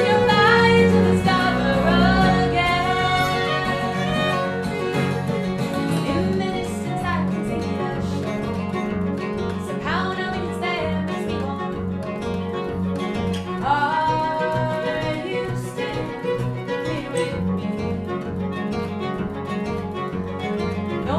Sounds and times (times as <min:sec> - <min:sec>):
Guitar: 0:00.0 - 0:21.1
Violin, fiddle: 0:00.0 - 0:21.1.